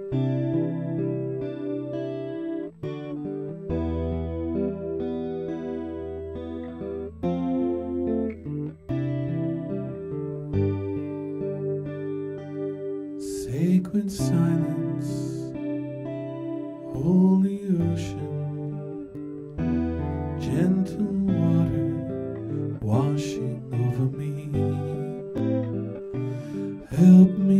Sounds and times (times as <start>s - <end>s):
Music: 0.0s - 27.5s.